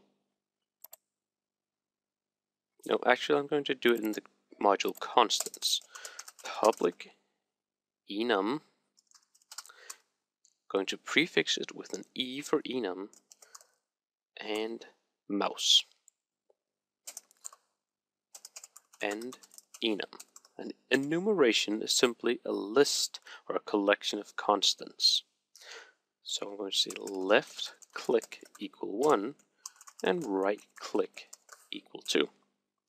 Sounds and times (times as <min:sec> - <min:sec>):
Speech: 0:02.9 - 0:07.1, 0:08.1 - 0:08.6, 0:10.7 - 0:13.1, 0:14.4 - 0:16.0, 0:19.0 - 0:25.3, 0:26.3 - 0:29.4, 0:30.0 - 0:32.3.